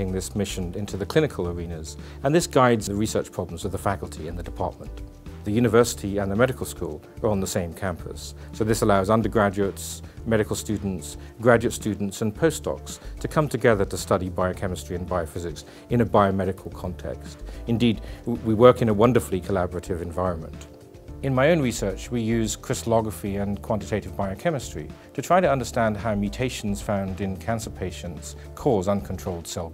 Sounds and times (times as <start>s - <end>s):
Music: 0.0s - 29.7s
Speech: 0.0s - 29.7s.